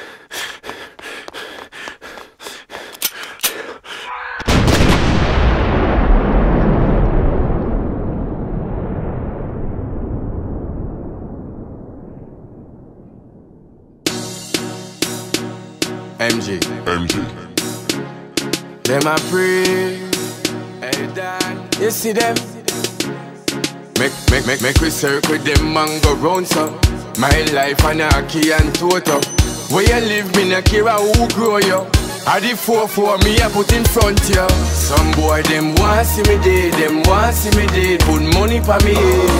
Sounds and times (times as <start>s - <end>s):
Music: 14.1s - 39.3s.